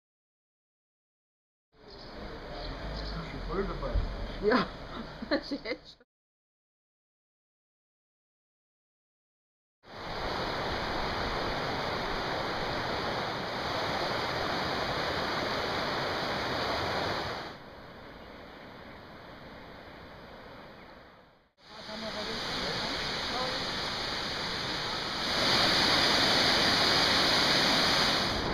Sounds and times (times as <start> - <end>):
Speech: 1.9 - 4.7, 21.7 - 23.7.